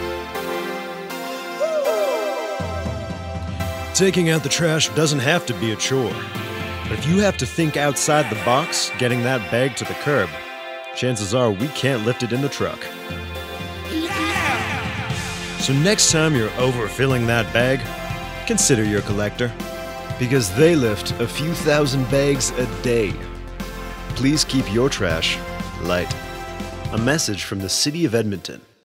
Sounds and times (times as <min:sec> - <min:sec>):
Music: 0:00.0 - 0:28.8
Speech: 0:04.0 - 0:06.2, 0:06.9 - 0:10.4, 0:11.0 - 0:12.9, 0:13.9 - 0:14.7, 0:15.6 - 0:19.6, 0:20.2 - 0:23.3, 0:24.1 - 0:26.2, 0:26.9 - 0:28.7.